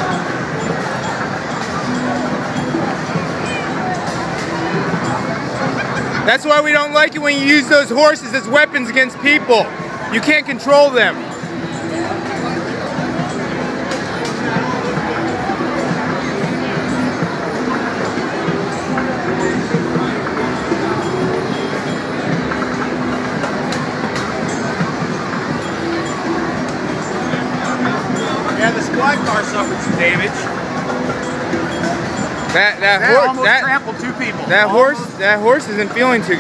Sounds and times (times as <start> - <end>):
Crowd: 0.0 - 36.4
Music: 0.0 - 36.4.